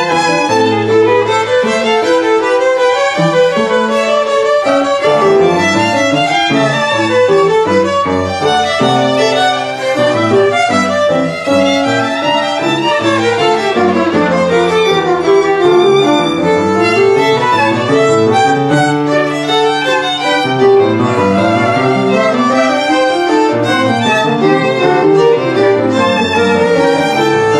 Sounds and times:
Violin, fiddle: 0:00.0 - 0:27.5.

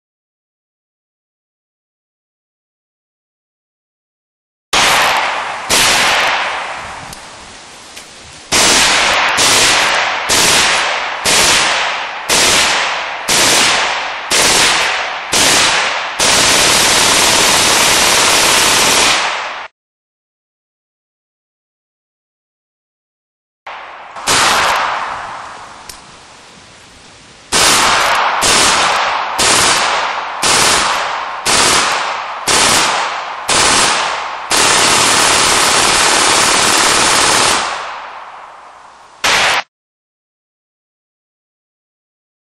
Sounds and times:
Machine gun: 0:04.8 - 0:06.6, 0:08.5 - 0:19.7, 0:24.2 - 0:25.0, 0:27.5 - 0:38.1, 0:39.3 - 0:39.7.

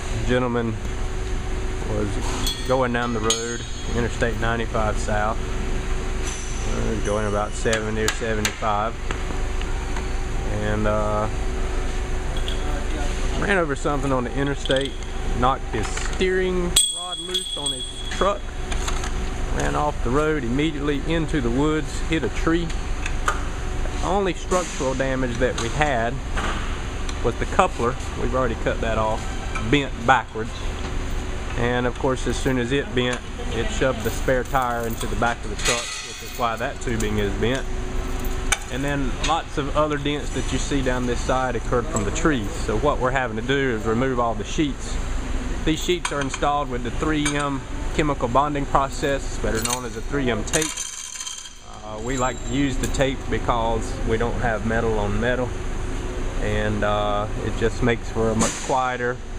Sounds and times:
Speech: 0:00.2 - 0:00.8, 0:01.8 - 0:05.4, 0:06.7 - 0:09.0, 0:10.5 - 0:11.4, 0:12.5 - 0:18.4, 0:19.5 - 0:22.8, 0:24.0 - 0:26.2, 0:27.2 - 0:30.7, 0:31.6 - 0:37.7, 0:38.7 - 0:45.0, 0:45.6 - 0:50.8, 0:51.7 - 0:55.5, 0:56.4 - 0:59.2.

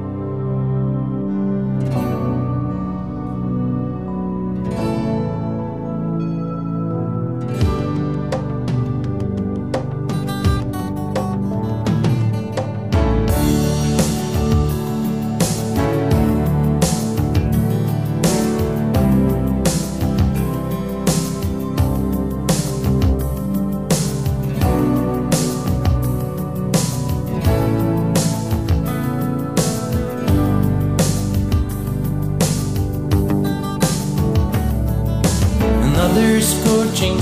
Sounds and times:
New-age music: 0:00.0 - 0:37.2.

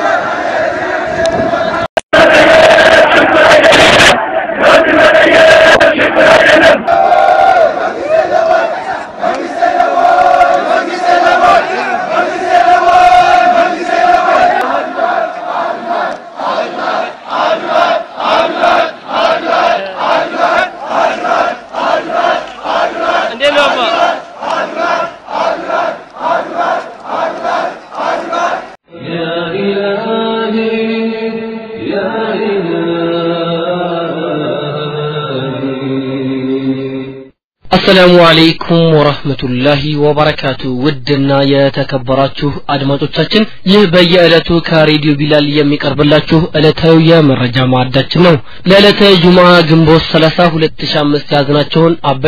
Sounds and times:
Speech: 0:19.7 - 0:20.0, 0:23.3 - 0:24.1, 0:37.7 - 0:52.2.

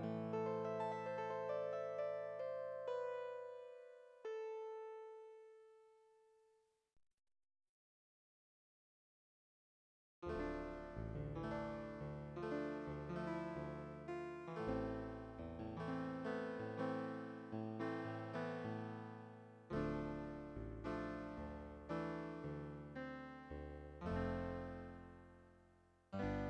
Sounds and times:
Music: 0:00.0 - 0:06.6, 0:10.2 - 0:26.4.

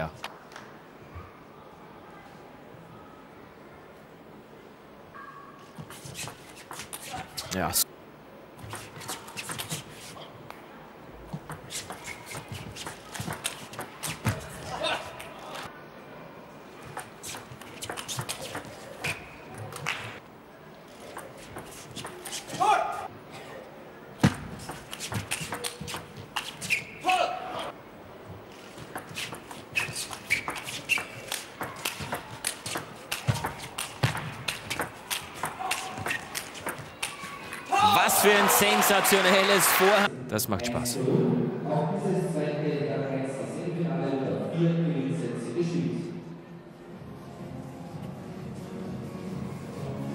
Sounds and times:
Inside, public space: 0:00.0 - 0:50.1.

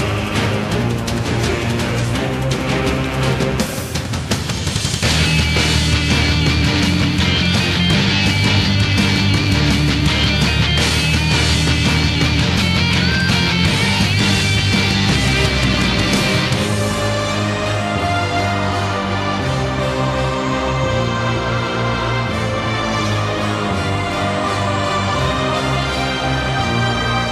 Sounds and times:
Music: 0:00.0 - 0:27.3.

